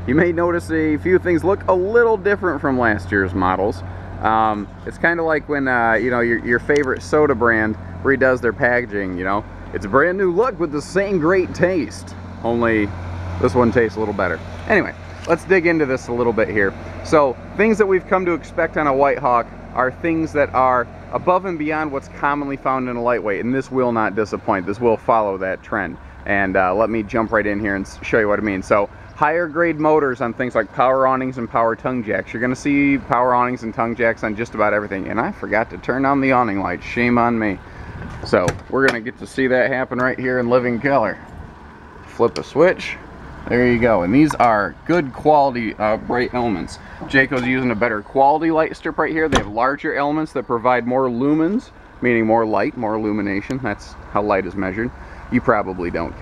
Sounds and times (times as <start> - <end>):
Speech: 0.0 - 37.6, 38.2 - 41.2, 42.1 - 56.2.